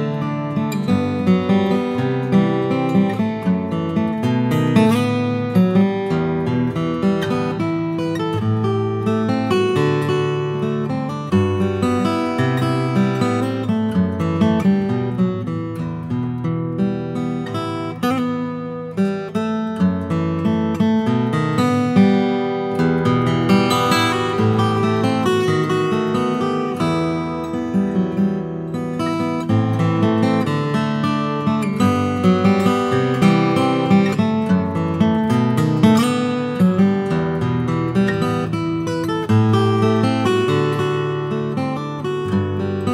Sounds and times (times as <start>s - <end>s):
Acoustic guitar: 0.0s - 42.9s.